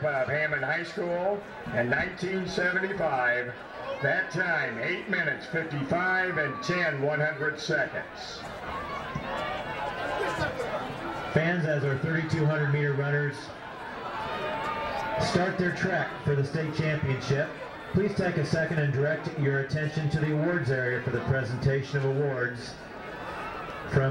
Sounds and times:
Speech: 0.0 - 8.5, 11.4 - 13.5, 15.2 - 22.8, 23.9 - 24.1.

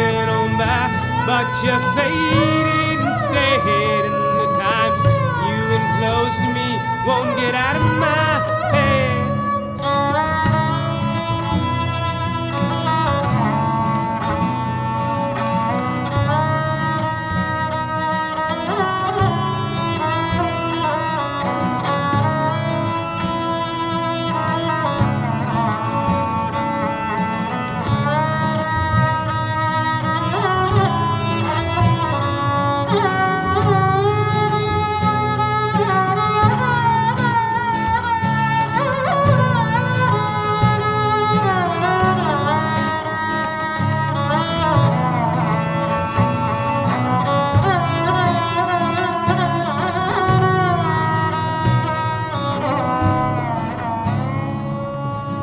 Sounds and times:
Tabla: 0.0 - 55.4.

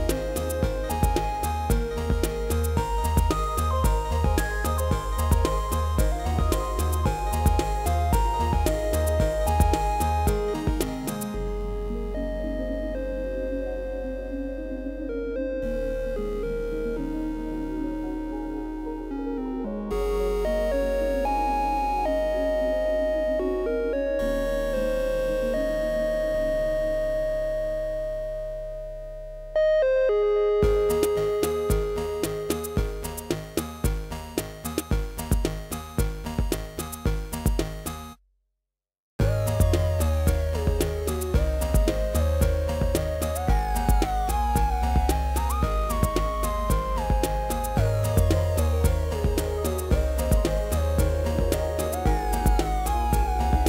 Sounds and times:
Music: 0.0 - 38.2, 39.2 - 53.6.

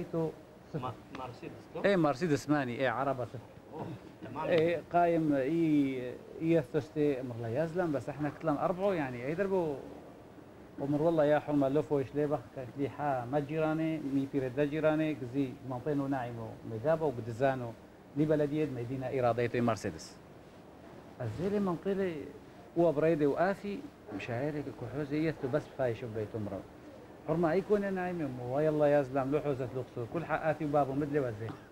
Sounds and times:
Speech: 0.0 - 9.9, 10.8 - 20.2, 21.2 - 26.6, 27.3 - 31.6.

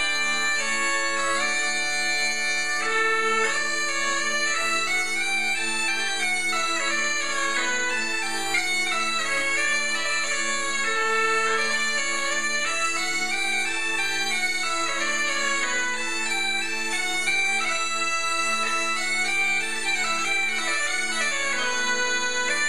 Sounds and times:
Bagpipes: 0.0 - 22.6
Wind instrument, woodwind instrument: 0.0 - 22.6.

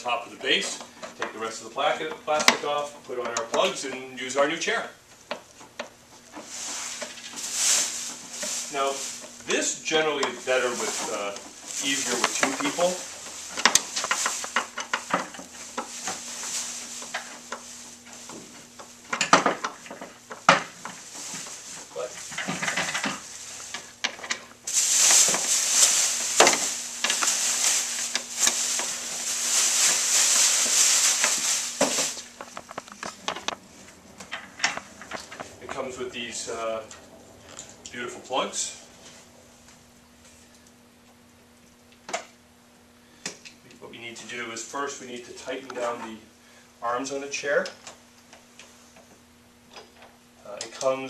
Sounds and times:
Speech: 0.0 - 5.0, 8.7 - 13.1, 21.9 - 22.2, 35.6 - 37.0, 37.9 - 38.9, 43.6 - 47.8, 50.4 - 51.0.

